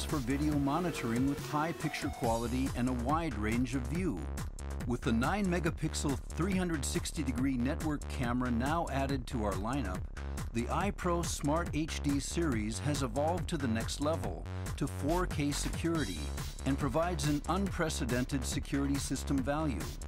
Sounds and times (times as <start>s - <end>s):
Speech: 0.0s - 4.2s, 4.9s - 10.0s, 10.6s - 20.0s
Music: 0.0s - 20.0s.